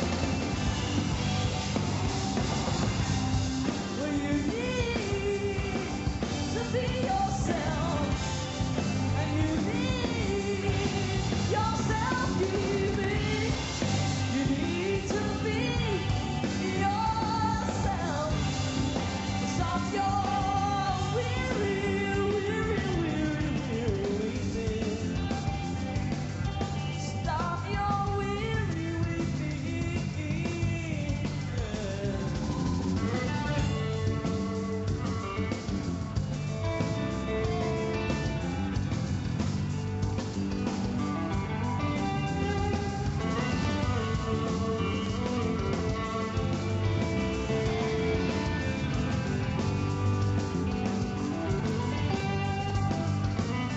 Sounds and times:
Music: 0:00.0 - 0:53.7.

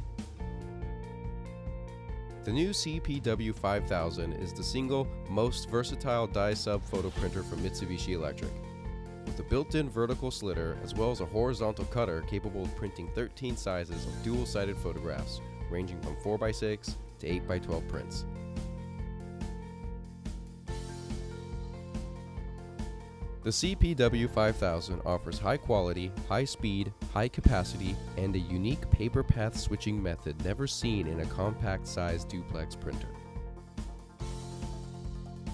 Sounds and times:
Music: 0:00.0 - 0:35.5
Speech: 0:02.5 - 0:08.6, 0:09.4 - 0:18.2, 0:23.5 - 0:33.2.

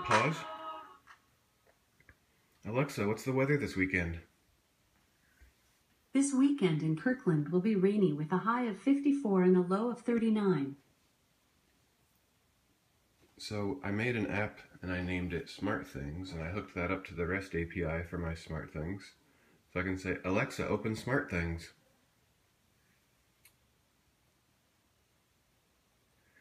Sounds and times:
Speech: 0:00.0 - 0:00.9, 0:02.6 - 0:04.3, 0:06.2 - 0:10.8, 0:13.4 - 0:21.8.

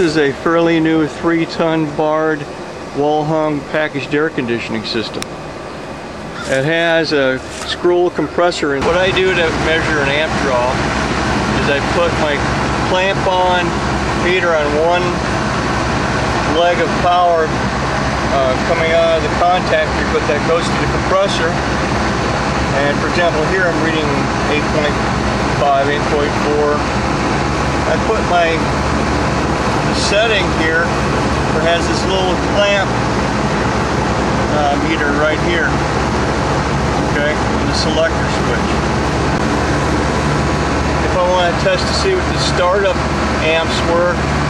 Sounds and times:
Speech: 0:00.0 - 0:05.3, 0:06.4 - 0:10.8, 0:11.5 - 0:15.3, 0:16.4 - 0:17.6, 0:18.3 - 0:21.6, 0:22.7 - 0:25.0, 0:25.6 - 0:26.9, 0:27.8 - 0:28.7, 0:29.9 - 0:30.9, 0:31.5 - 0:33.0, 0:34.5 - 0:35.8, 0:37.0 - 0:38.8, 0:41.0 - 0:44.2.

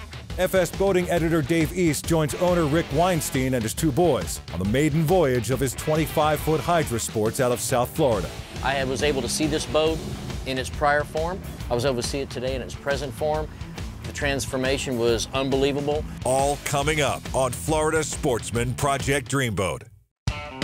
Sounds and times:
Music: 0:00.0 - 0:20.6
Speech: 0:00.4 - 0:13.5, 0:14.1 - 0:19.9.

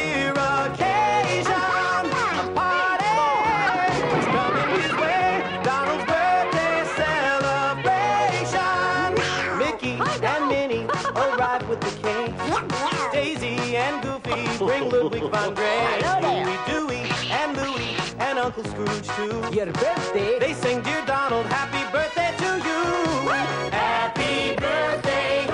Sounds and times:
Music: 0:00.0 - 0:25.5
Speech: 0:16.0 - 0:16.6.

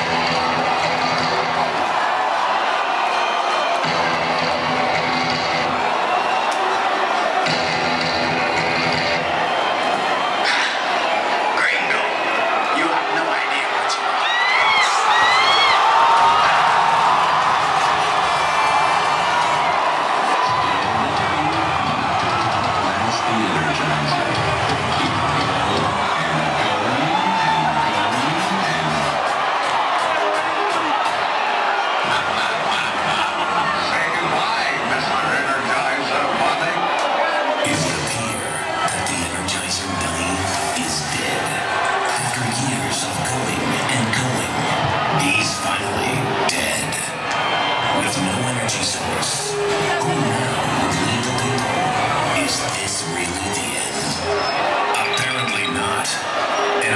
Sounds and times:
Cheering: 0:00.0 - 0:56.9.

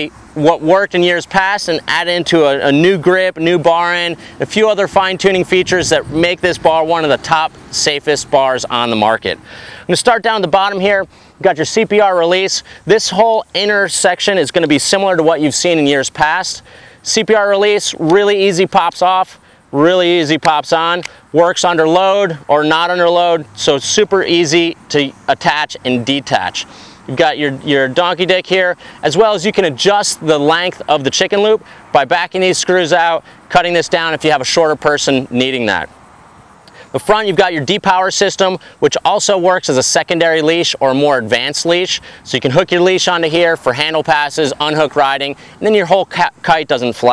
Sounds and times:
Speech: 0:00.0 - 0:35.9, 0:36.8 - 0:47.1.

